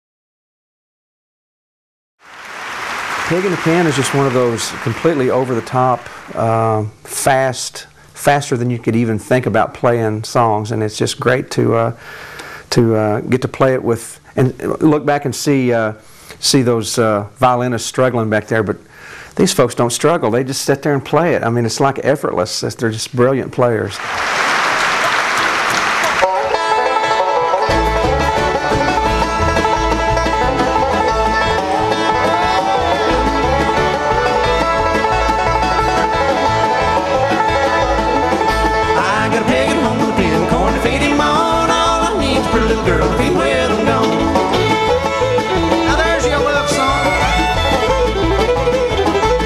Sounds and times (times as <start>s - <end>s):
Music: 3.3s - 5.8s, 26.1s - 49.4s.